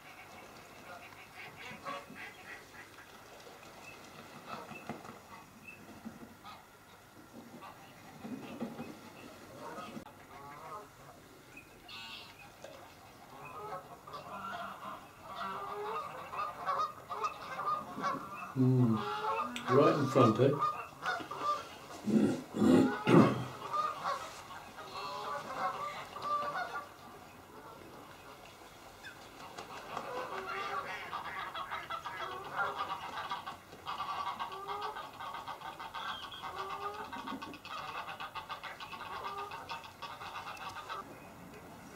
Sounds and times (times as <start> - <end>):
Duck: 0.0 - 11.2, 11.8 - 28.4, 29.0 - 41.1.